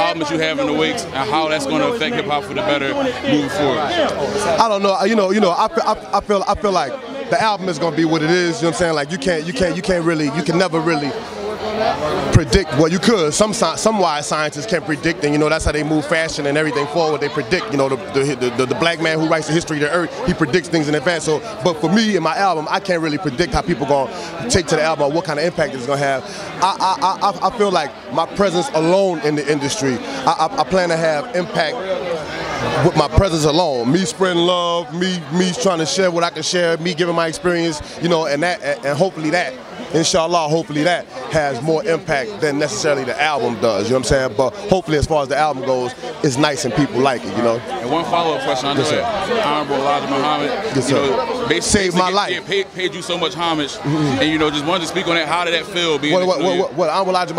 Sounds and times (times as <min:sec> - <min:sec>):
Speech: 0:00.0 - 0:57.3.